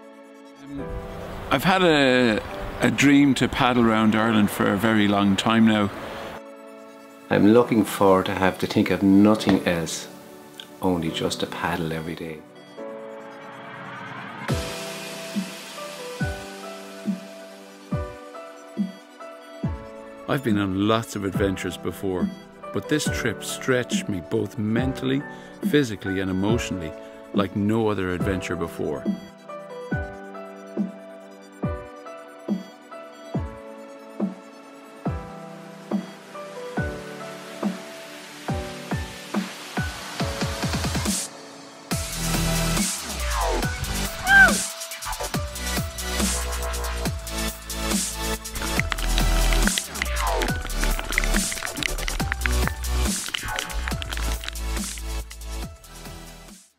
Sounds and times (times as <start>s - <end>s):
Music: 0.0s - 56.7s
Speech: 1.5s - 6.0s, 7.3s - 10.1s, 10.8s - 12.4s, 20.3s - 29.1s.